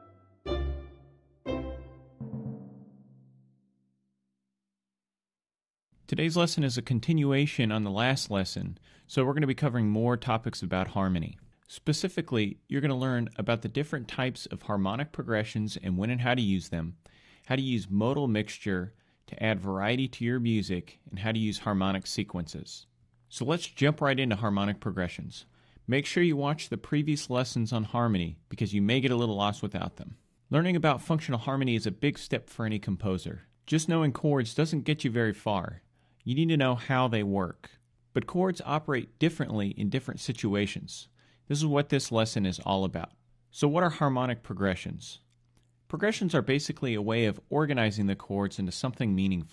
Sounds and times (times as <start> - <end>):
Speech: 6.1 - 45.3, 45.9 - 49.5.